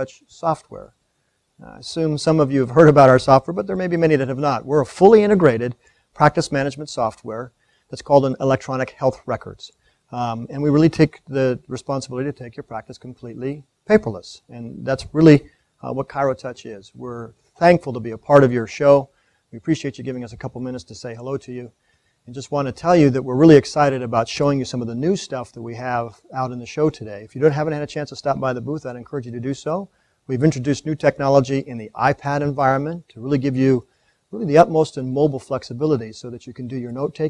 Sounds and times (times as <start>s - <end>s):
Speech: 0.0s - 0.9s, 1.6s - 37.2s.